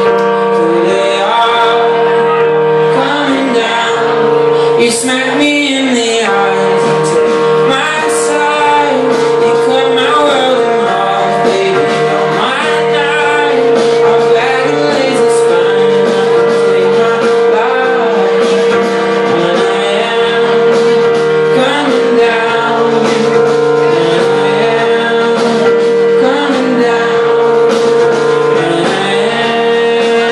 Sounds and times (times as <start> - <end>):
Pop music: 0.0 - 30.3.